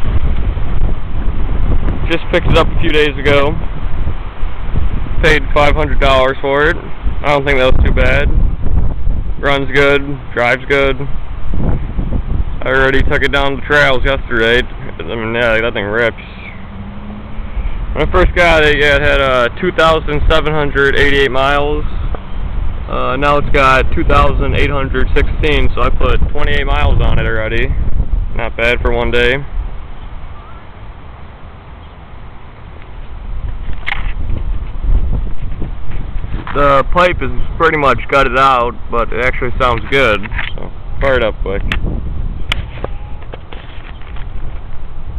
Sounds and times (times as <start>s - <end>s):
Speech: 2.1s - 3.6s, 5.2s - 8.3s, 9.4s - 11.1s, 12.6s - 16.5s, 18.0s - 21.9s, 22.9s - 27.8s, 28.4s - 29.5s, 36.5s - 41.7s.